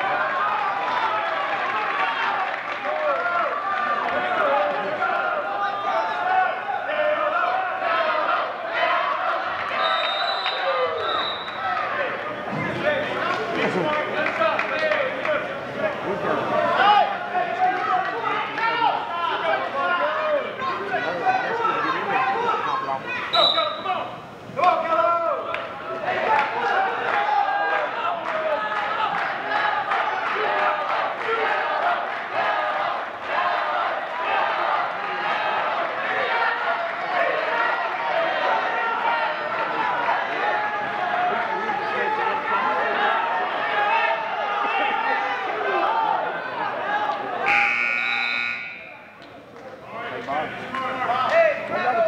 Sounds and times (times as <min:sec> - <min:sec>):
Speech: 0:00.0 - 0:09.8, 0:10.5 - 0:47.5, 0:48.8 - 0:52.0
Inside, public space: 0:00.0 - 0:52.0.